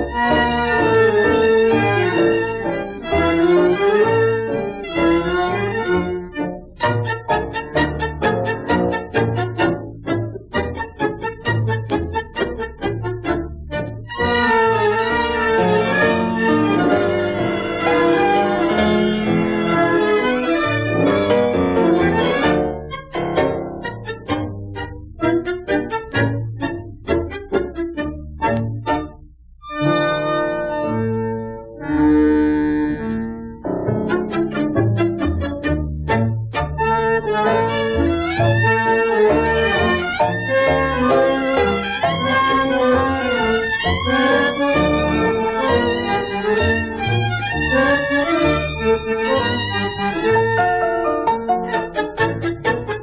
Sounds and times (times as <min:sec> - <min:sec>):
Violin, fiddle: 0:00.0 - 0:22.8, 0:34.0 - 0:53.0.